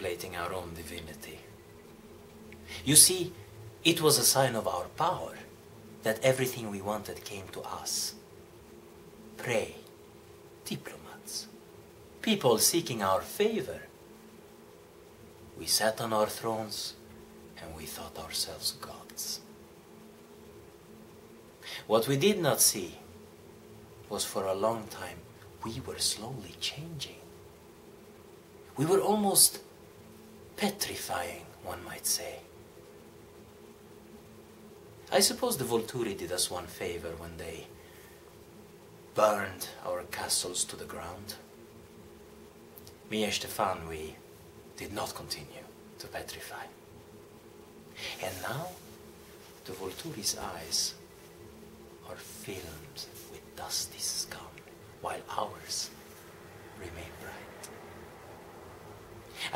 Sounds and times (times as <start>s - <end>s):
Speech: 0.0s - 1.5s, 2.7s - 8.2s, 9.4s - 9.9s, 10.6s - 11.5s, 12.2s - 13.9s, 15.6s - 17.0s, 17.6s - 19.5s, 21.7s - 23.1s, 24.1s - 27.3s, 28.8s - 29.7s, 30.6s - 32.5s, 35.1s - 37.7s, 39.2s - 41.5s, 43.1s - 44.2s, 44.8s - 46.8s, 48.0s - 48.8s, 49.6s - 51.0s, 52.0s - 56.0s, 56.8s - 57.8s.